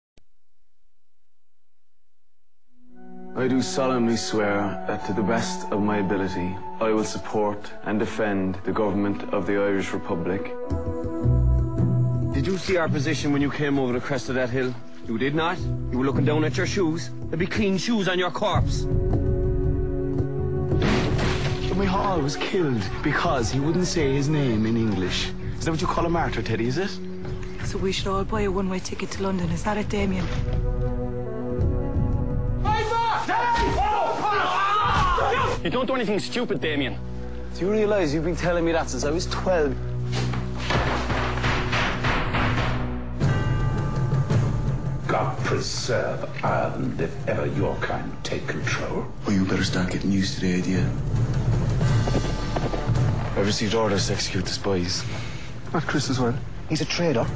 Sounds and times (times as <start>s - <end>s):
Music: 2.7s - 57.3s.